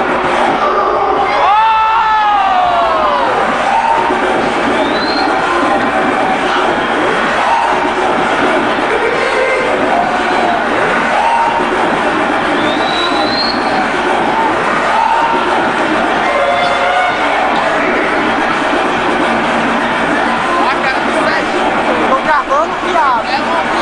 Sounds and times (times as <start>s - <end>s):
Music: 0.0s - 23.8s
Speech: 20.4s - 23.8s.